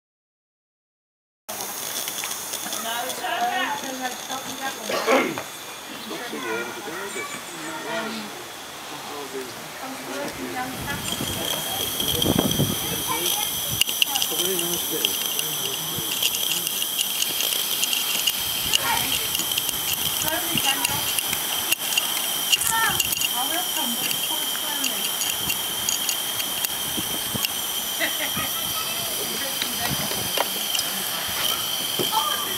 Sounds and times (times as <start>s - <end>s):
Speech: 2.7s - 16.9s, 20.2s - 21.1s, 28.4s - 31.2s.